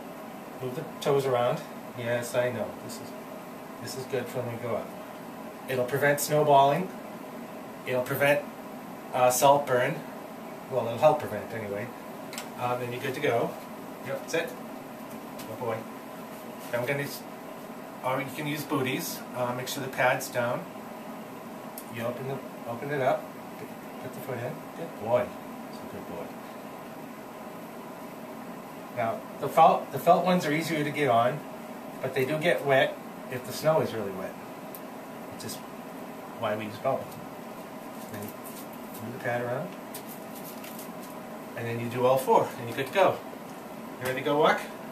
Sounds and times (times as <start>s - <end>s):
Speech: 0.6s - 3.2s, 3.8s - 5.0s, 5.7s - 7.0s, 7.8s - 8.5s, 9.1s - 10.1s, 10.7s - 12.0s, 12.6s - 14.6s, 15.4s - 15.9s, 16.7s - 17.3s, 18.0s - 20.7s, 21.8s - 23.3s, 24.0s - 26.5s, 29.0s - 34.4s, 35.3s - 35.7s, 36.4s - 37.2s, 38.1s - 38.4s, 39.0s - 39.8s, 41.6s - 43.3s, 44.0s - 44.8s.